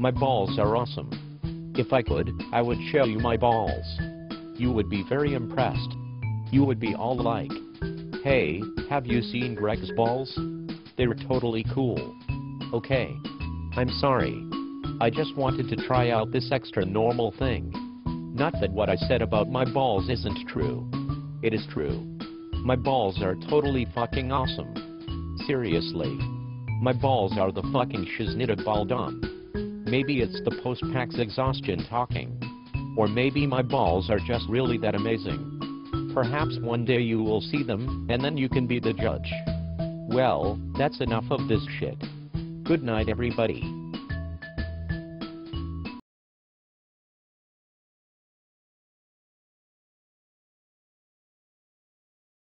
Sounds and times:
Speech: 0.0 - 1.2, 1.8 - 4.0, 4.6 - 7.6, 8.2 - 10.4, 11.0 - 13.2, 13.8 - 17.8, 18.4 - 22.0, 22.6 - 24.8, 25.4 - 29.2, 29.9 - 32.4, 33.0 - 35.5, 36.1 - 39.4, 40.1 - 42.0, 42.7 - 43.7
Music: 0.0 - 46.0.

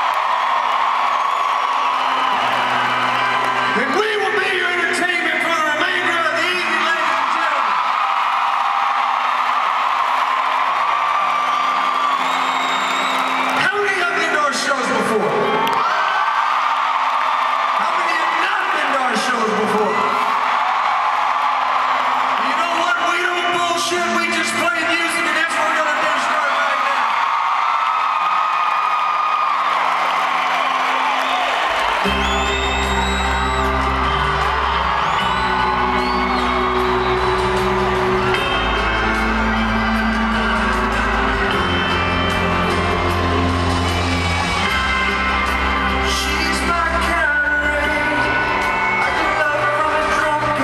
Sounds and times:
Music: 0.0 - 50.6
Speech: 3.8 - 7.7, 13.6 - 15.5, 17.8 - 20.2, 22.4 - 27.0, 46.1 - 48.3, 49.0 - 50.6.

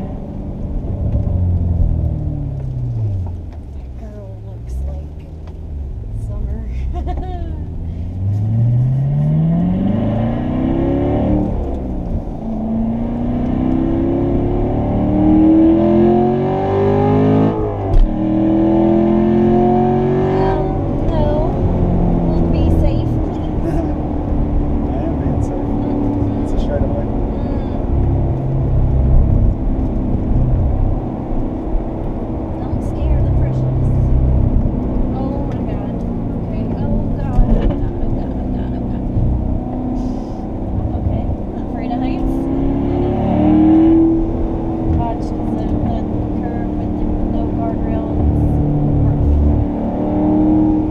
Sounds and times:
Speech: 3.8 - 5.3, 6.2 - 7.6, 20.3 - 21.5, 22.3 - 24.0, 24.9 - 27.8, 32.6 - 34.0, 35.2 - 39.0, 40.0 - 42.5, 45.0 - 48.6.

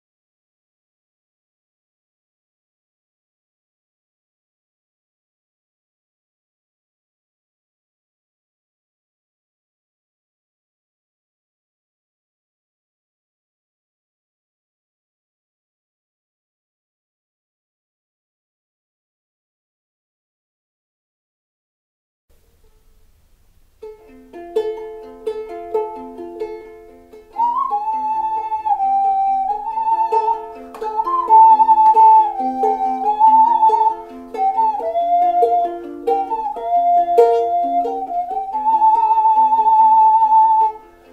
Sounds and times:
Inside, small room: 22.3 - 41.1
Ukulele: 22.3 - 41.1
Flute: 27.1 - 41.1.

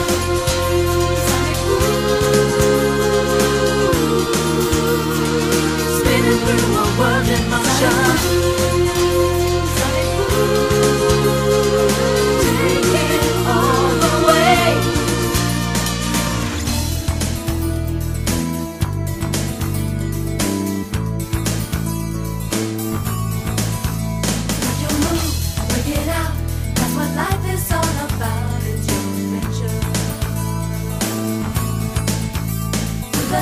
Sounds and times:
Soundtrack music: 0.0 - 25.6.

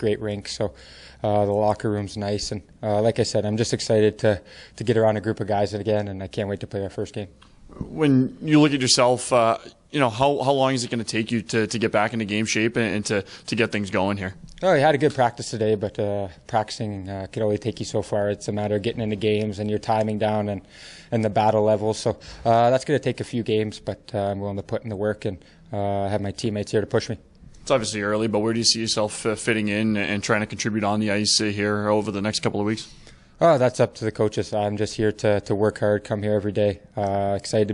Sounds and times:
Speech: 0.0 - 37.7.

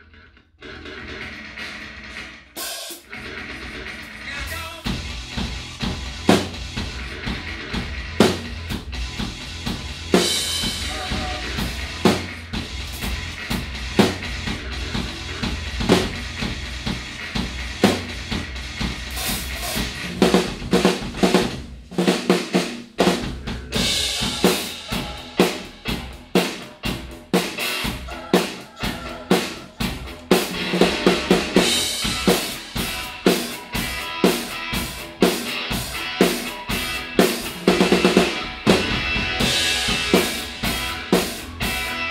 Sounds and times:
Music: 0.0 - 42.1.

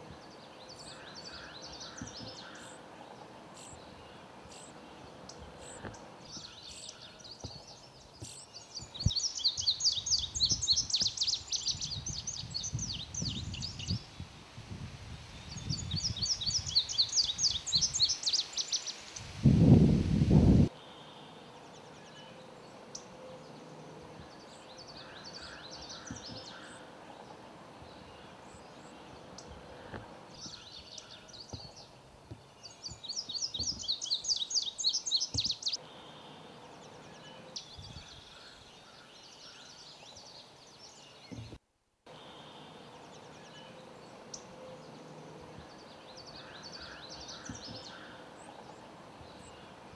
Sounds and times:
Bird: 0.0 - 14.0, 20.7 - 49.9.

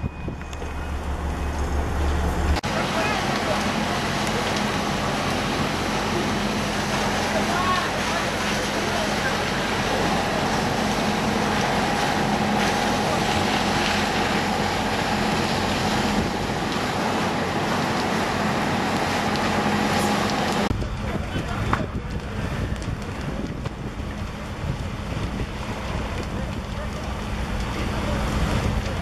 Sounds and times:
Fire: 0.0 - 29.0
Speech: 2.6 - 15.1, 20.7 - 23.6, 25.8 - 29.0.

